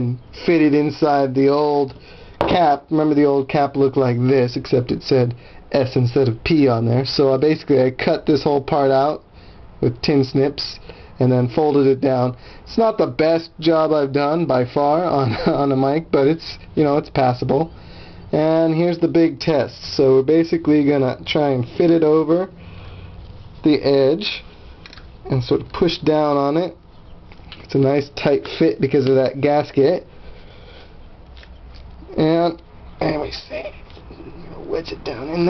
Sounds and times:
Speech: 0:00.0 - 0:01.9, 0:02.5 - 0:09.2, 0:09.8 - 0:17.7, 0:18.3 - 0:22.5, 0:23.6 - 0:24.4, 0:25.3 - 0:26.8, 0:27.7 - 0:30.1, 0:32.1 - 0:35.4
Inside, small room: 0:00.0 - 0:35.4.

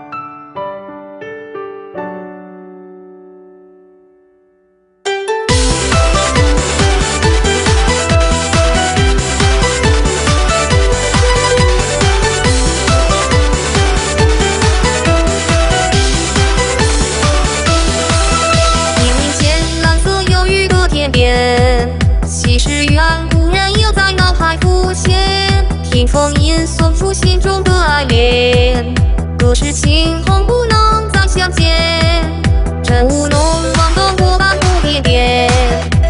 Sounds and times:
Music: 0:00.0 - 0:36.1.

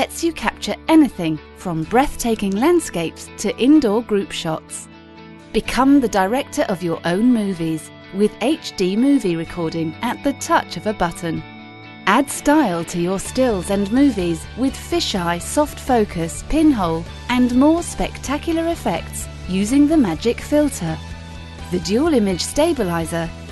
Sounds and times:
Speech: 0:00.0 - 0:04.9, 0:05.6 - 0:11.4, 0:12.1 - 0:21.0, 0:21.7 - 0:23.3
Music: 0:00.0 - 0:23.5.

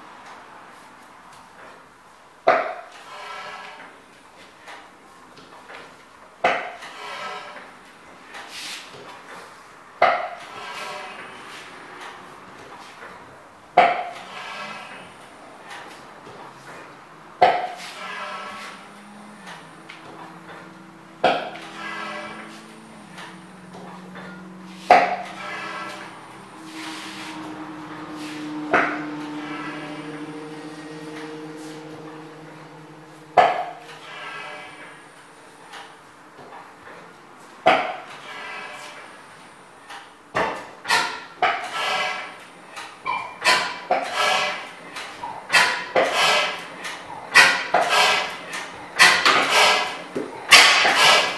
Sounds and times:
Engine: 0:00.0 - 0:51.3.

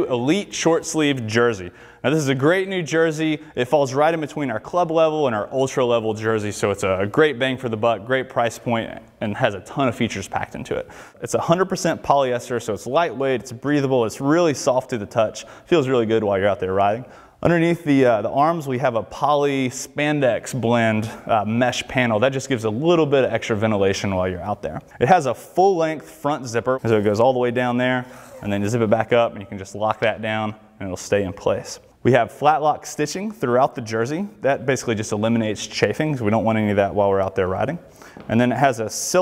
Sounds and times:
Speech: 0:00.0 - 0:39.2.

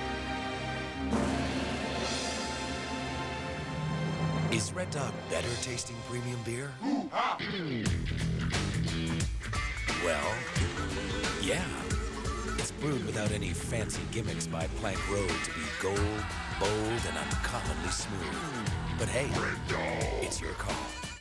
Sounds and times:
Music: 0:00.0 - 0:21.2
Speech: 0:04.5 - 0:07.6, 0:10.0 - 0:10.5, 0:11.4 - 0:11.9, 0:12.6 - 0:20.9.

